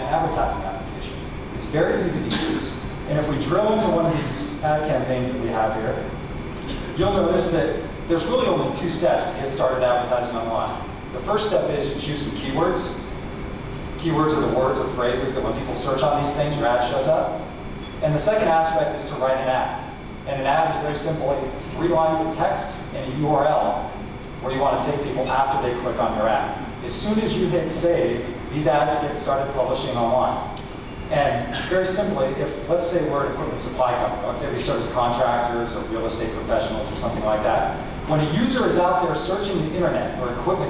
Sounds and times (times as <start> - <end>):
Speech: 0.0 - 13.1, 14.0 - 40.7
Inside, large room or hall: 0.0 - 40.7.